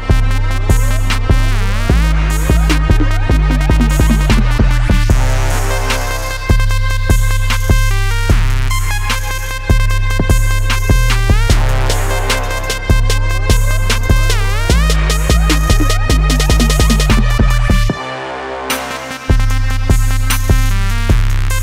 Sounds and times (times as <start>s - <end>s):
Music: 0.0s - 21.6s.